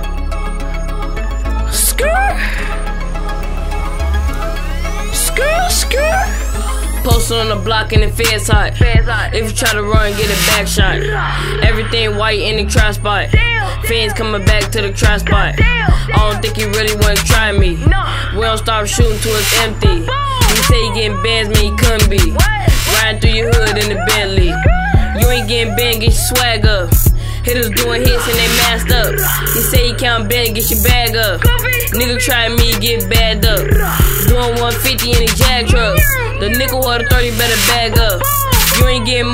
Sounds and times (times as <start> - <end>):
Music: 0.0 - 39.3.